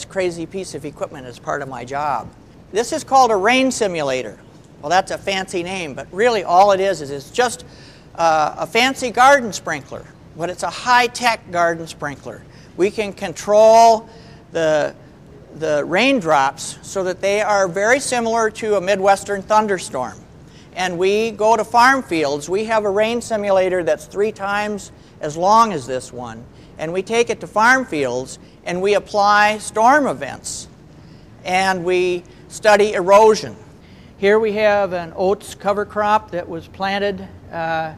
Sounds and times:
Speech: 0:00.0 - 0:07.6, 0:08.2 - 0:20.2, 0:20.8 - 0:30.7, 0:31.4 - 0:33.6, 0:34.2 - 0:37.9.

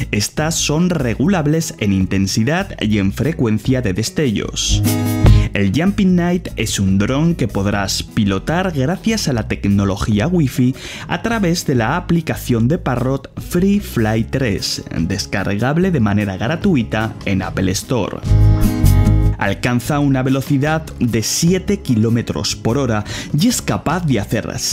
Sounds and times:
Speech: 0:00.0 - 0:04.8, 0:05.5 - 0:18.3, 0:19.4 - 0:24.7
Music: 0:00.0 - 0:24.7.

